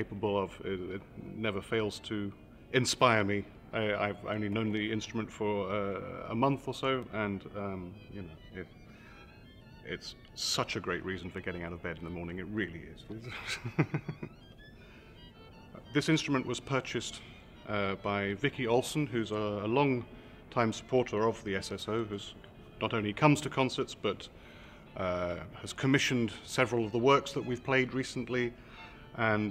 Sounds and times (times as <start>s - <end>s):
Speech: 0.0s - 8.7s, 9.9s - 13.4s, 15.8s - 24.3s, 25.0s - 28.5s, 29.2s - 29.5s
Violin, fiddle: 0.0s - 29.5s.